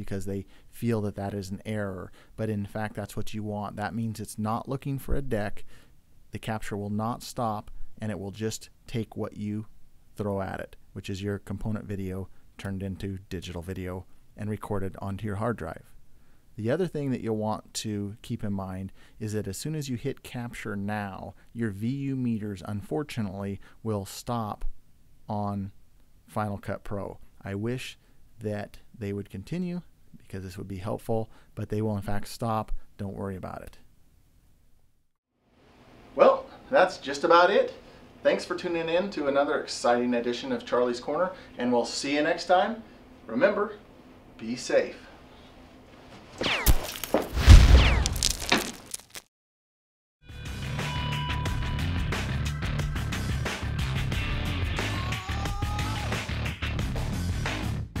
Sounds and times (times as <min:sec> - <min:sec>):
Speech: 0:00.0 - 0:05.6, 0:06.3 - 0:15.9, 0:16.6 - 0:24.7, 0:25.3 - 0:33.8, 0:36.2 - 0:45.1
Music: 0:50.2 - 0:58.0.